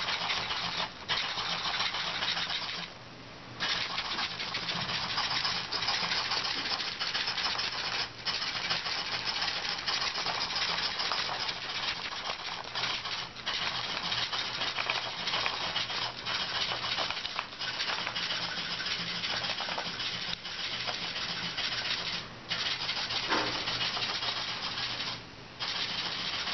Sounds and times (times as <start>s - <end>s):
Printer: 3.6s - 26.5s.